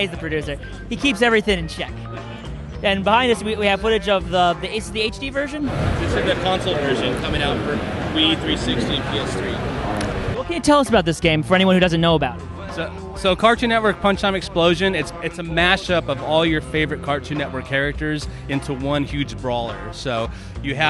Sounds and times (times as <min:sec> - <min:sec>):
Speech: 0:00.0 - 0:01.9, 0:02.8 - 0:20.9
Music: 0:00.0 - 0:20.9.